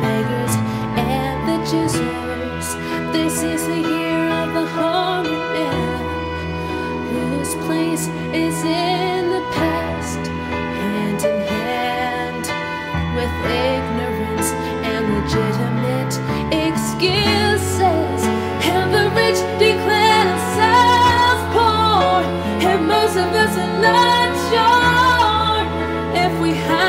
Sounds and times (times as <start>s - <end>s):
Sad music: 0.0s - 26.8s.